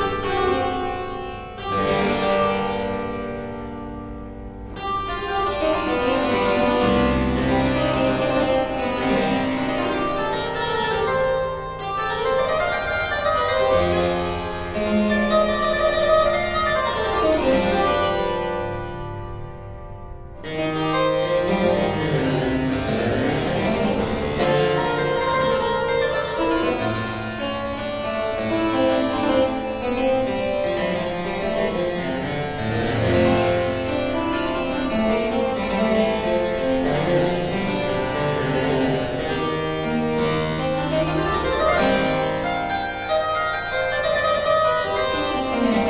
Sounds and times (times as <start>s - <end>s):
Classical music: 0.0s - 45.8s
Harpsichord: 0.0s - 45.8s.